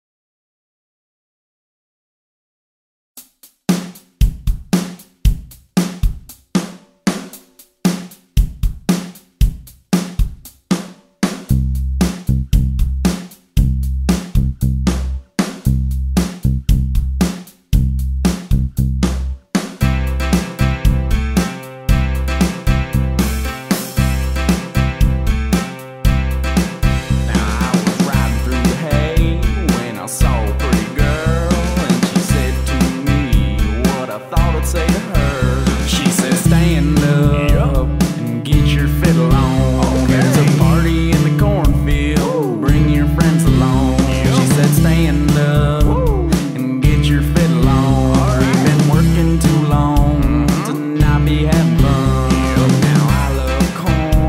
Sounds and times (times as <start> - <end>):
Rhythm and blues: 3.2 - 54.2
Funk: 4.2 - 54.2
Soul music: 19.8 - 54.2.